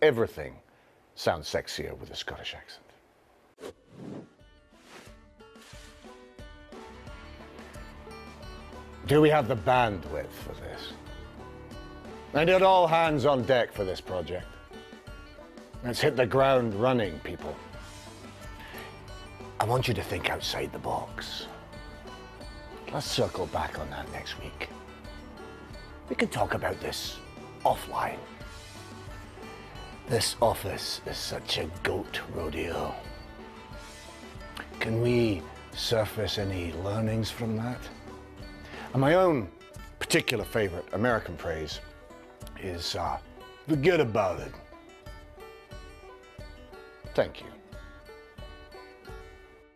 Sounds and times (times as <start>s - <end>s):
Speech: 0.0s - 0.6s, 1.2s - 3.0s, 9.0s - 11.0s, 12.3s - 14.5s, 15.8s - 17.6s, 19.6s - 21.5s, 22.9s - 24.7s, 26.1s - 28.3s, 30.1s - 33.1s, 34.6s - 37.9s, 38.9s - 41.9s, 42.6s - 44.6s, 47.1s - 47.7s
Music: 4.3s - 49.7s.